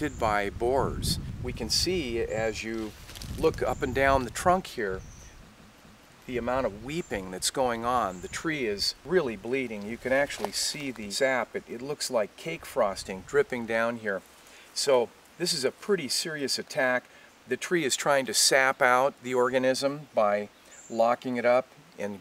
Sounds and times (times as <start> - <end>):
Speech: 0.0 - 5.0, 6.3 - 14.2, 14.8 - 22.2.